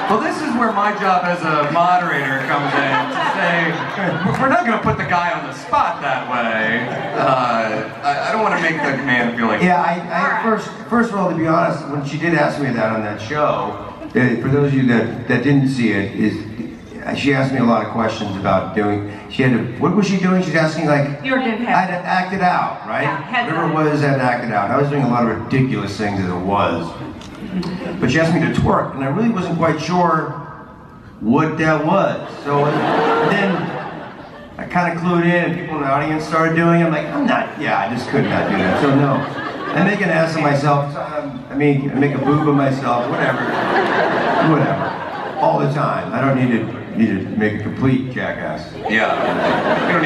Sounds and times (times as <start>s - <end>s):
Speech: 0.0s - 27.0s, 27.6s - 30.4s, 34.6s - 43.5s.